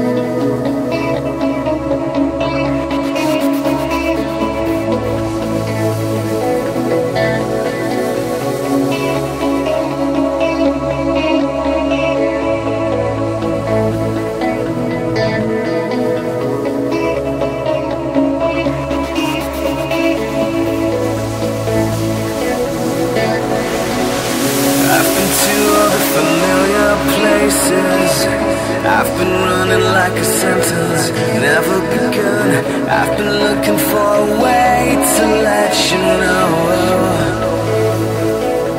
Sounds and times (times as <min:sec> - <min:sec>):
Music: 0:00.0 - 0:38.7.